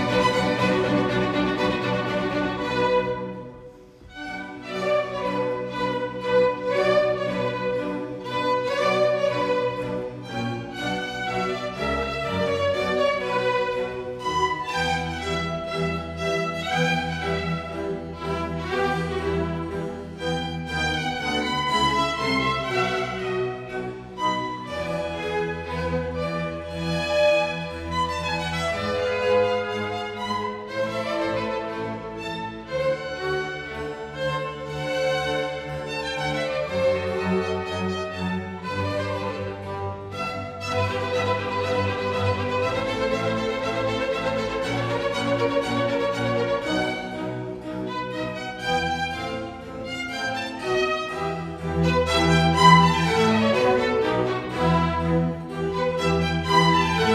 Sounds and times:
Violin, fiddle: 0.0 - 57.1.

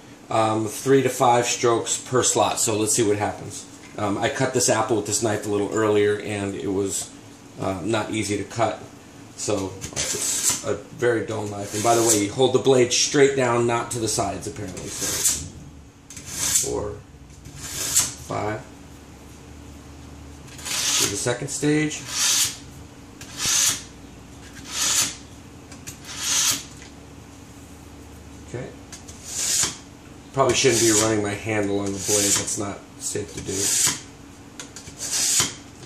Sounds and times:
Filing (rasp): 9.9 - 10.7, 11.5 - 12.3, 14.8 - 15.5, 16.1 - 16.8, 17.5 - 18.2, 20.5 - 21.2, 22.0 - 22.6, 23.2 - 23.9, 24.5 - 25.2, 25.9 - 26.7, 29.0 - 29.8, 30.5 - 31.2, 31.8 - 32.6, 33.4 - 34.1, 34.8 - 35.6
Rub: 10.0 - 10.6, 11.6 - 12.3, 29.1 - 29.7, 30.5 - 31.1, 31.8 - 32.5.

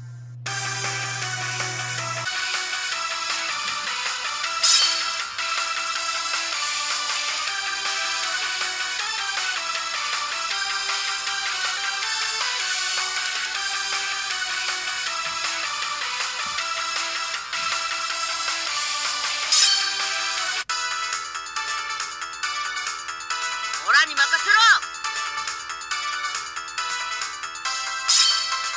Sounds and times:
Music: 0.0 - 28.7
Speech: 23.8 - 24.8.

